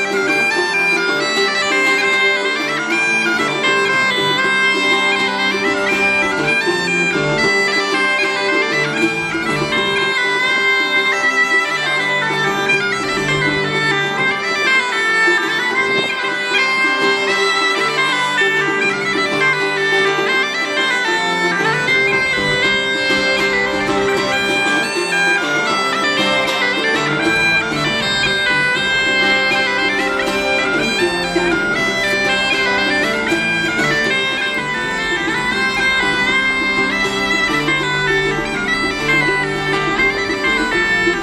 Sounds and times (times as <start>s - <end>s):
Bagpipes: 0.0s - 41.2s.